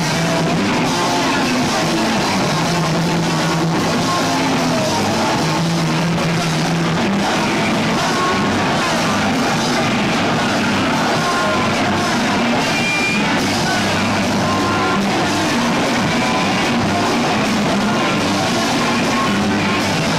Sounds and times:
Music: 0.0s - 20.1s.

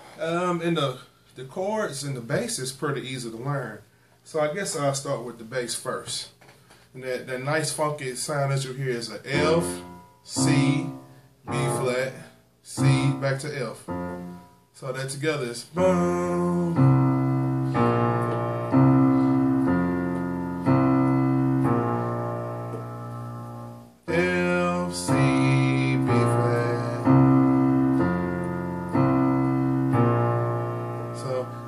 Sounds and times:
Music: 13.9s - 14.6s, 16.2s - 31.6s.

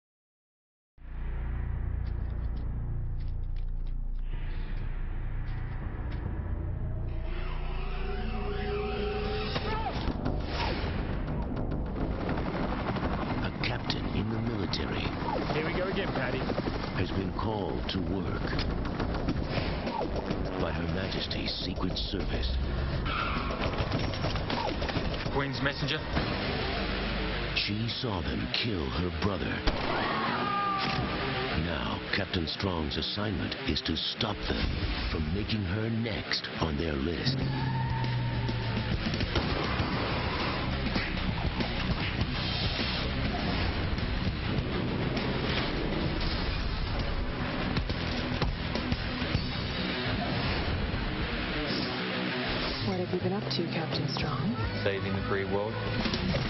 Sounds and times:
Music: 1.0s - 30.6s, 37.0s - 56.4s.

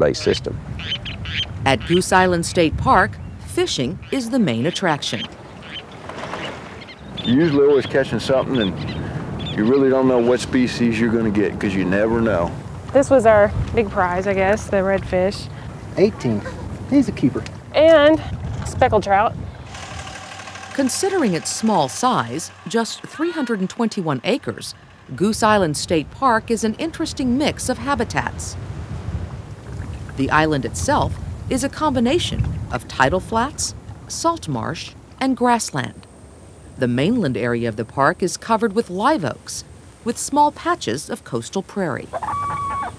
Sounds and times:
Speech: 0.0s - 0.6s, 1.7s - 5.3s, 7.3s - 8.8s, 9.6s - 19.3s, 20.8s - 28.6s, 30.2s - 36.1s, 36.8s - 42.2s.

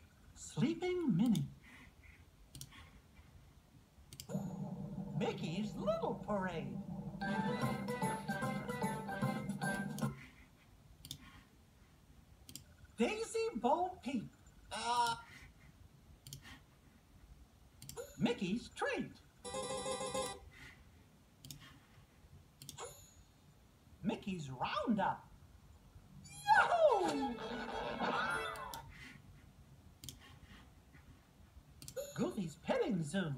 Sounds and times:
Speech: 0.4s - 1.5s, 5.2s - 6.8s, 13.0s - 15.2s, 18.2s - 19.2s, 24.0s - 25.3s, 26.5s - 27.4s, 32.2s - 33.3s
Music: 7.2s - 10.2s.

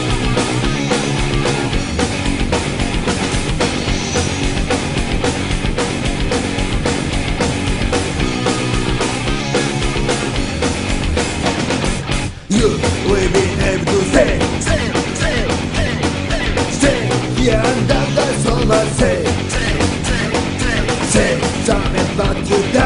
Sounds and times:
Music: 0.0s - 22.8s.

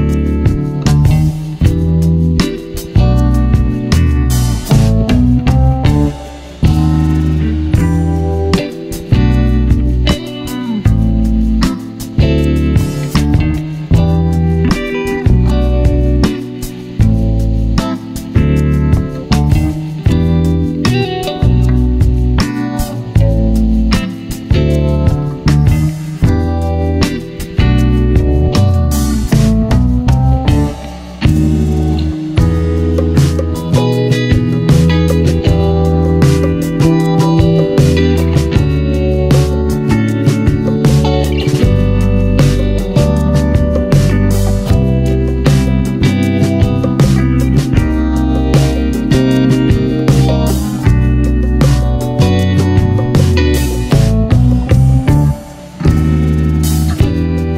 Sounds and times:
Music: 0.0s - 57.5s.

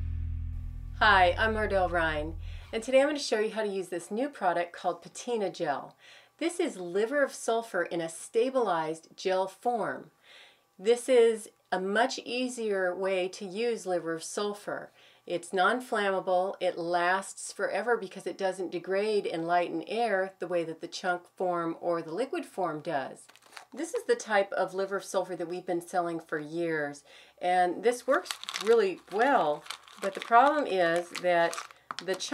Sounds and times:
Speech: 1.0s - 10.1s, 10.8s - 23.2s, 23.8s - 32.3s.

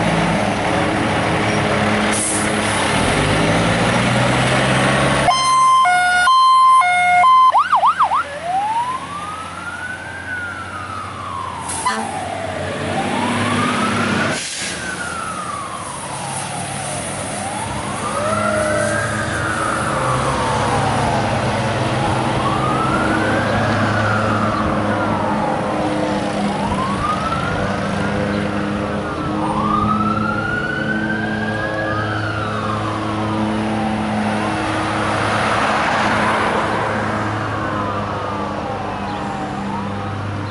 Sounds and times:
Fire engine, fire truck (siren): 0.0s - 40.5s
Truck: 0.0s - 40.5s.

